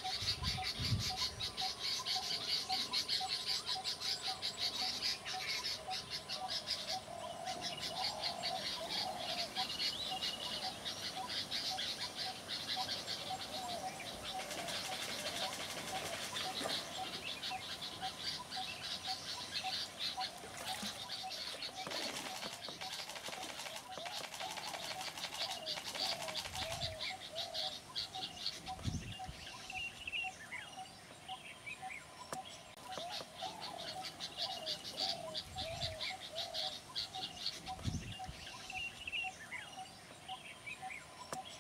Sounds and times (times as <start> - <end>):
Environmental noise: 0.0 - 41.6.